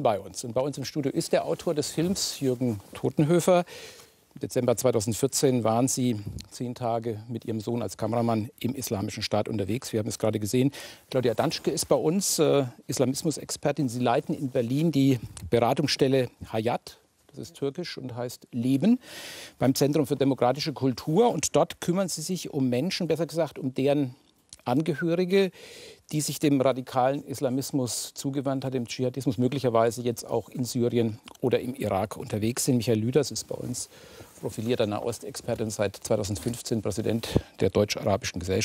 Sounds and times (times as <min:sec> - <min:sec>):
Speech: 0:00.0 - 0:03.7, 0:04.4 - 0:19.0, 0:19.6 - 0:38.6.